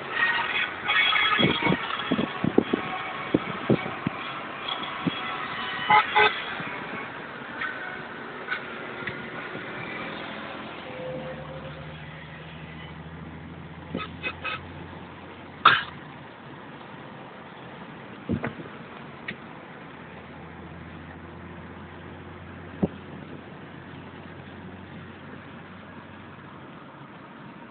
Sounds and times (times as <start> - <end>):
Car: 0.0 - 27.7.